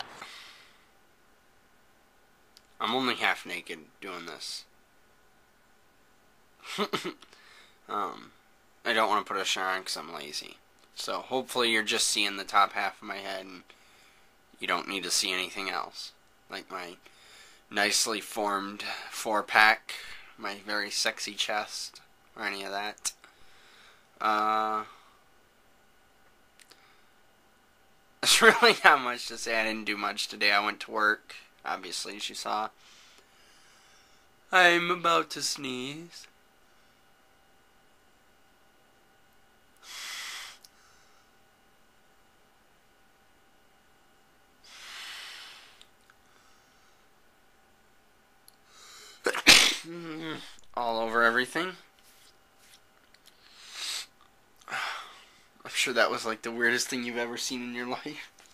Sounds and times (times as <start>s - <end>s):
Speech: 2.8s - 4.7s, 7.9s - 13.6s, 14.6s - 17.0s, 17.7s - 23.2s, 24.2s - 24.9s, 28.2s - 32.8s, 34.5s - 36.3s, 50.1s - 51.9s, 55.6s - 58.3s
Sneeze: 49.3s - 50.6s.